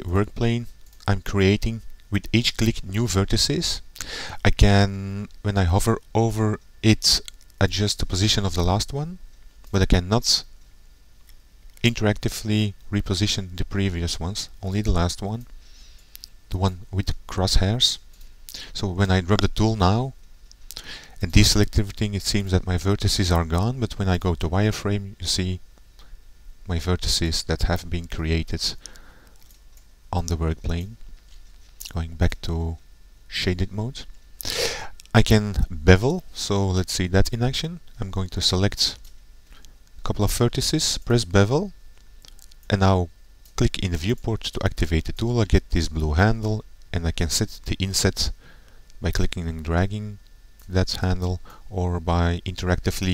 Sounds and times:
Speech: 0.0s - 10.5s, 11.8s - 15.5s, 16.5s - 20.2s, 21.2s - 25.6s, 26.6s - 28.8s, 30.1s - 31.0s, 31.8s - 34.1s, 35.1s - 39.0s, 40.0s - 41.8s, 42.7s - 48.4s, 49.0s - 53.1s.

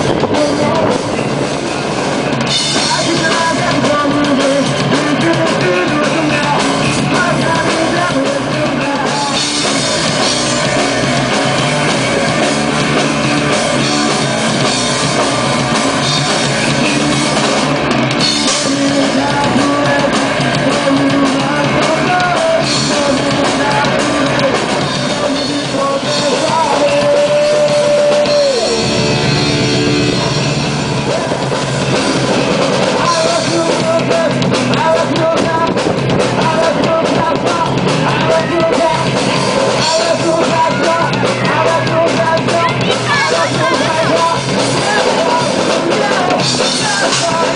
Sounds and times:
Bass guitar: 0.0s - 47.5s
Electric guitar: 0.0s - 47.5s
Progressive rock: 0.0s - 47.5s
Punk rock: 0.0s - 47.5s
Rock and roll: 0.0s - 47.5s.

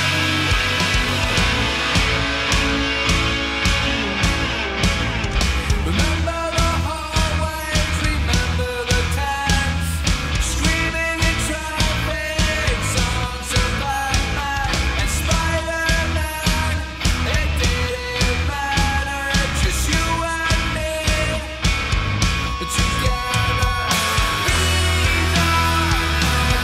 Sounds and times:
Music: 0.0s - 26.6s.

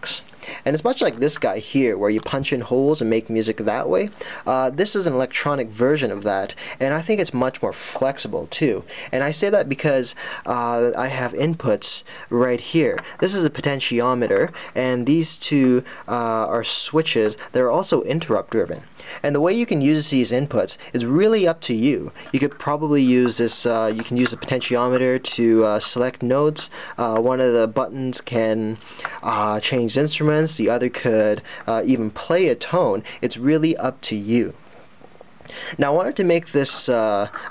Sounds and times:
Speech: 0.0s - 34.6s, 35.8s - 37.5s.

